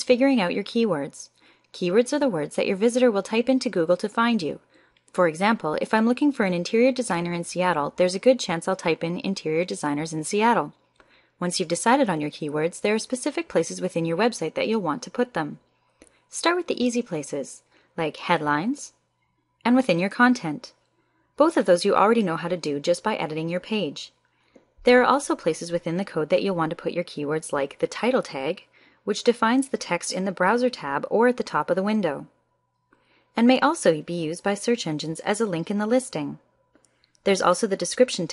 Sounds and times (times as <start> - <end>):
Speech: 0.0 - 4.6, 5.2 - 10.7, 11.4 - 15.6, 16.3 - 18.9, 19.7 - 20.7, 21.4 - 24.1, 24.8 - 32.3, 33.4 - 36.4, 37.3 - 38.3.